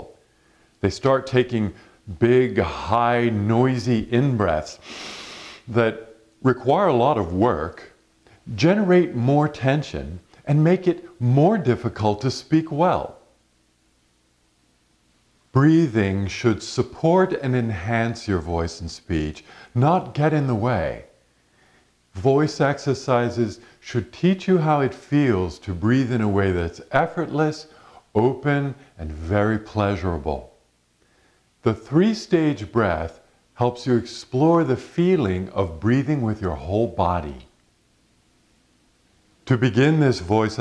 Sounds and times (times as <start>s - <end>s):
Speech: 0.0s - 0.2s, 0.8s - 4.8s, 5.7s - 13.3s, 15.5s - 21.2s, 22.1s - 30.6s, 31.6s - 37.6s, 39.4s - 40.6s.